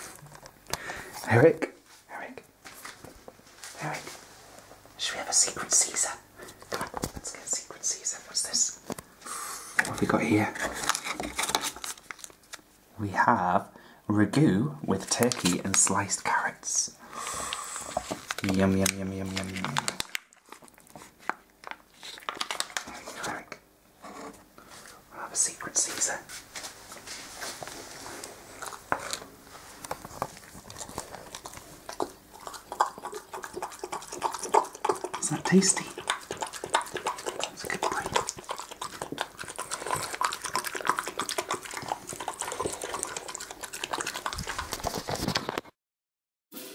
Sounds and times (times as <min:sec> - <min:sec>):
Inside, small room: 0:00.0 - 0:45.8
Speech: 0:01.2 - 0:02.4, 0:09.9 - 0:10.7, 0:13.0 - 0:17.0, 0:18.4 - 0:20.0, 0:35.2 - 0:36.0
Chewing, mastication: 0:17.5 - 0:23.1, 0:27.7 - 0:45.7
Dog: 0:30.5 - 0:45.5.